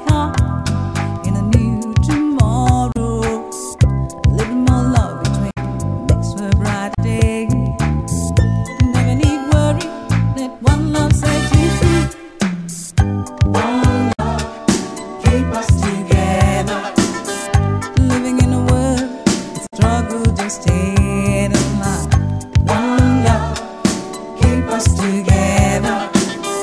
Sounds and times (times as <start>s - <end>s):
Music: 0.0s - 26.6s.